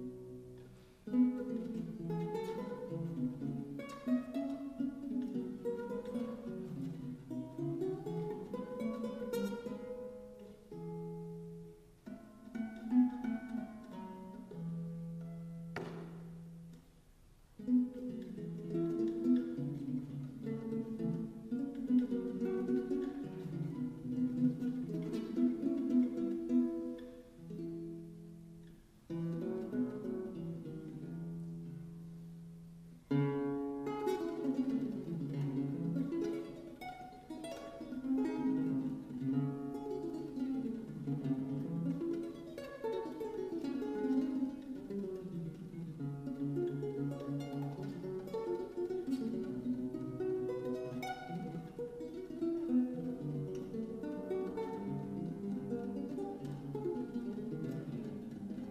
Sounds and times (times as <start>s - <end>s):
Acoustic guitar: 0.0s - 58.7s
Strum: 0.0s - 58.7s.